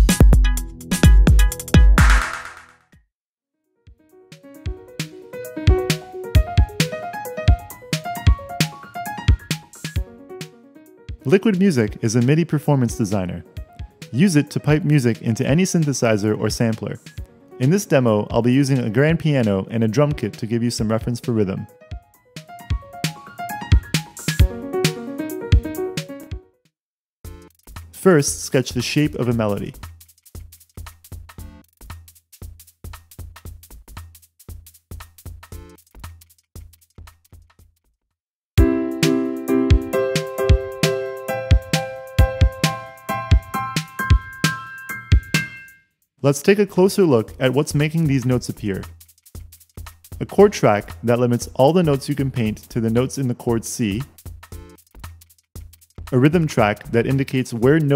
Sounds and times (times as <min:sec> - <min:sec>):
Soundtrack music: 0:04.1 - 0:11.5, 0:22.4 - 0:26.4, 0:38.6 - 0:45.8
Speech: 0:11.2 - 0:13.5, 0:14.1 - 0:21.7, 0:28.0 - 0:29.8, 0:46.2 - 0:48.9, 0:50.2 - 0:54.1, 0:56.1 - 0:57.9.